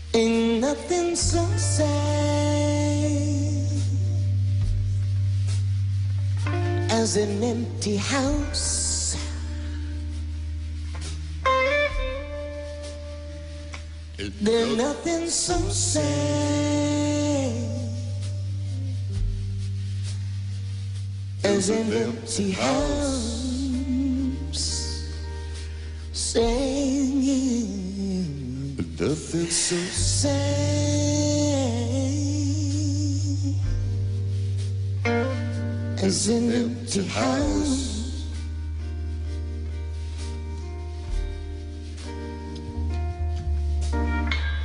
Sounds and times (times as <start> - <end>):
Acoustic guitar: 0.0 - 44.6.